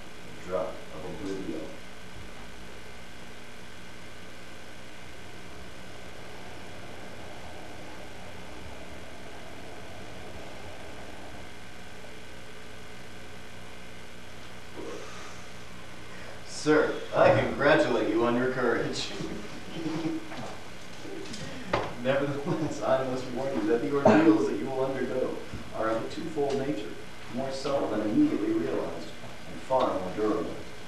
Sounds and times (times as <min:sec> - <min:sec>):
Speech: 0:00.4 - 0:01.8, 0:16.5 - 0:19.4, 0:22.0 - 0:30.6.